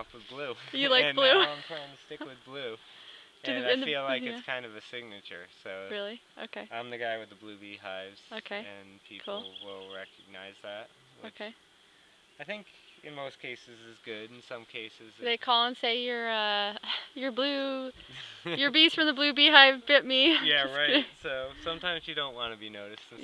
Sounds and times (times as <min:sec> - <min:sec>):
Speech: 0:00.0 - 0:02.8, 0:03.5 - 0:11.5, 0:12.4 - 0:23.2.